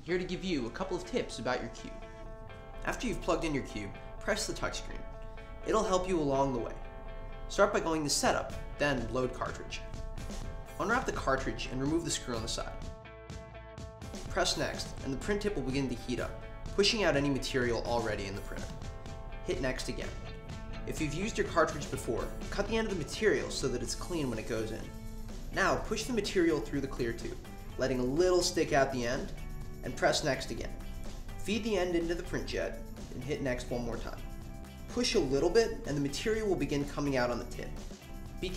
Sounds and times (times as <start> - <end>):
Speech: 0.0 - 2.0, 2.8 - 5.0, 5.6 - 6.8, 7.5 - 9.8, 10.8 - 12.8, 14.3 - 18.7, 19.4 - 20.2, 20.9 - 24.9, 25.6 - 30.8, 31.4 - 34.2, 34.9 - 37.8
Music: 0.0 - 38.5.